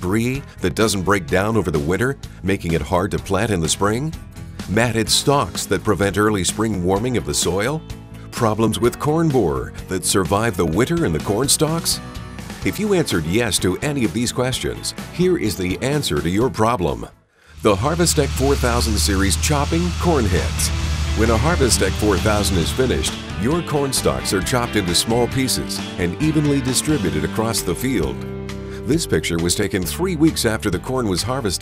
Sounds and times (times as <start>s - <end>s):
Speech: 0.0s - 12.0s, 12.6s - 28.2s, 28.8s - 31.6s
Music: 0.0s - 31.6s.